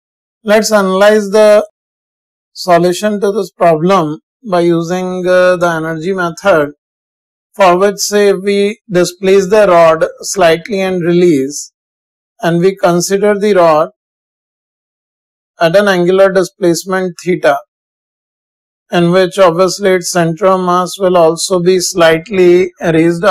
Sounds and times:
Speech: 0.5 - 1.7, 2.6 - 6.8, 7.6 - 11.7, 12.4 - 14.0, 15.6 - 17.7, 18.9 - 23.3.

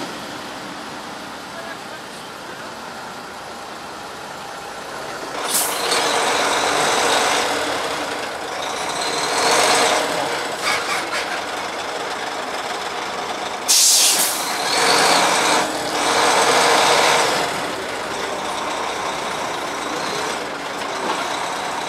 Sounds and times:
Truck: 0.0 - 21.8.

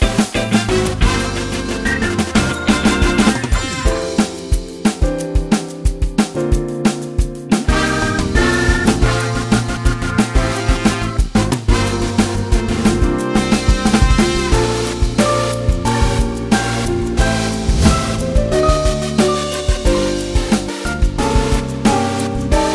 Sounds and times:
Music: 0.0 - 22.7.

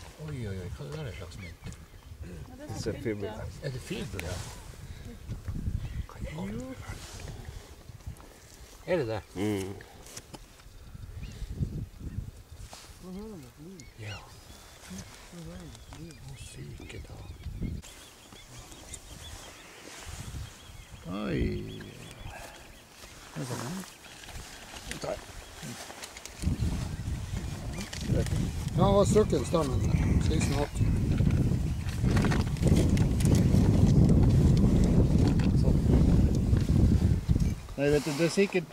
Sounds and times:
Outside, rural or natural: 0.0 - 38.7.

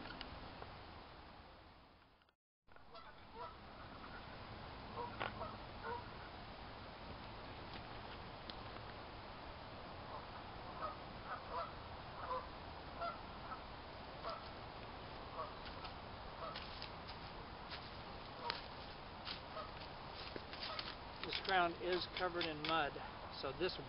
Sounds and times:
Outside, rural or natural: 0.0 - 23.8
Speech: 21.3 - 23.8.

